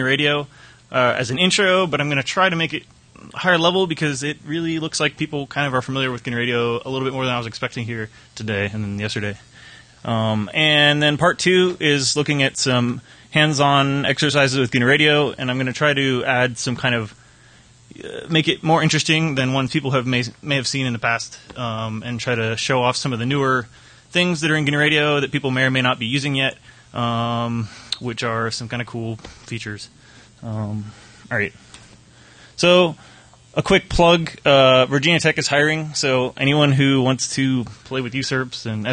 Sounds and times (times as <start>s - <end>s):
Speech: 0.0s - 17.2s, 17.9s - 31.6s, 32.6s - 38.9s.